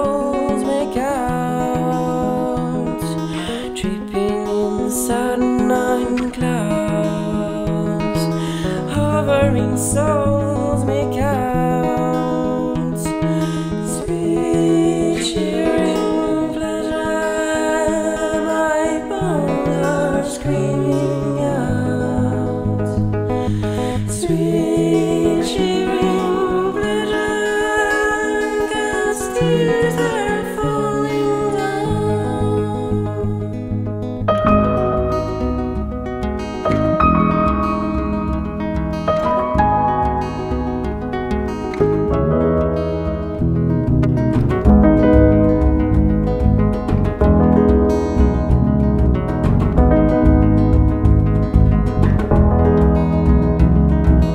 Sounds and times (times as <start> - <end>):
Music: 0.0 - 54.3.